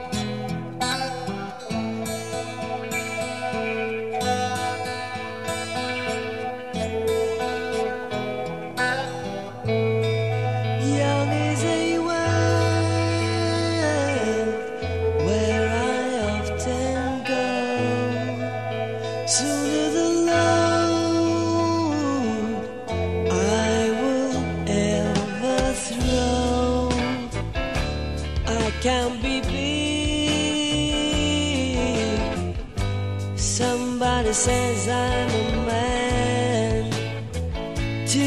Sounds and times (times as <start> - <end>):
Music: 0.0 - 38.2.